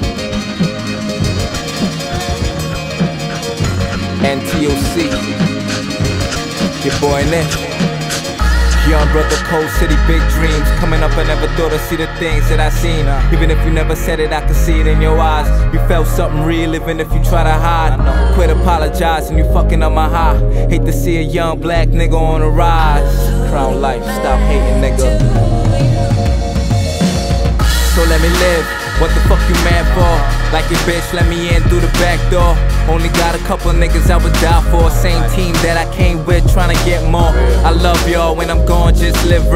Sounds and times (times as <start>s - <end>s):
Rhythm and blues: 0.0s - 39.5s.